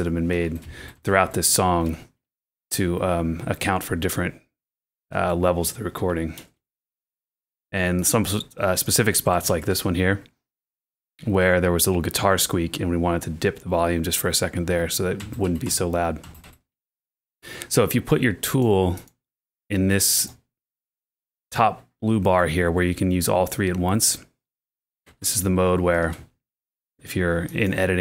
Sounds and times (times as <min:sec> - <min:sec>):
Speech: 0:00.0 - 0:02.1, 0:02.7 - 0:04.4, 0:05.1 - 0:06.5, 0:07.7 - 0:10.3, 0:11.2 - 0:16.2, 0:17.7 - 0:19.1, 0:19.7 - 0:20.4, 0:21.5 - 0:24.3, 0:25.2 - 0:26.3, 0:27.0 - 0:28.0.